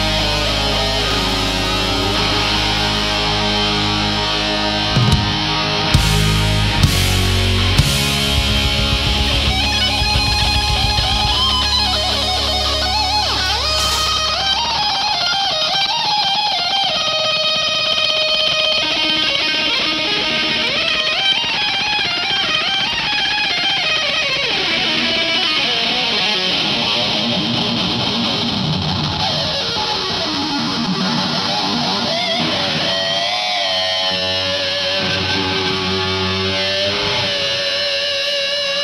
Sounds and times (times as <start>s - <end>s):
Music: 0.0s - 38.8s.